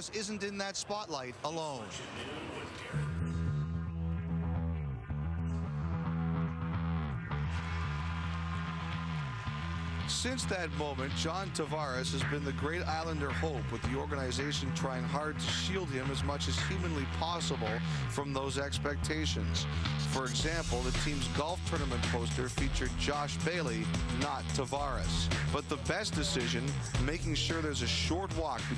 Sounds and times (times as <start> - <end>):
Speech: 0.0 - 3.1, 10.1 - 28.7
Music: 2.8 - 28.7.